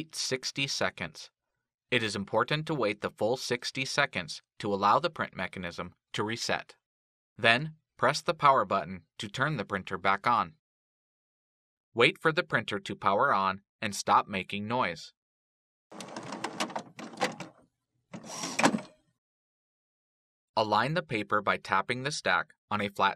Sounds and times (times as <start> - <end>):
Speech: 0.0 - 1.3, 2.0 - 6.8, 7.4 - 10.6, 12.0 - 15.2, 20.6 - 23.1.